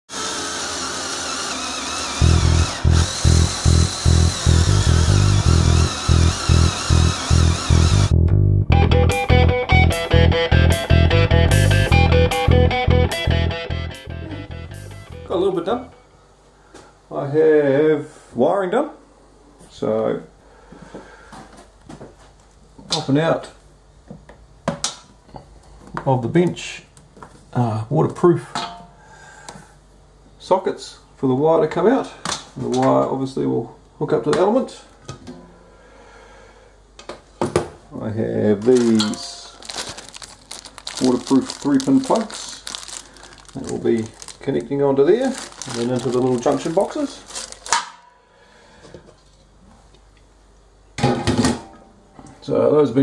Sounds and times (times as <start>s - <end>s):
Power tool: 0.1s - 8.1s
Music: 2.2s - 16.0s.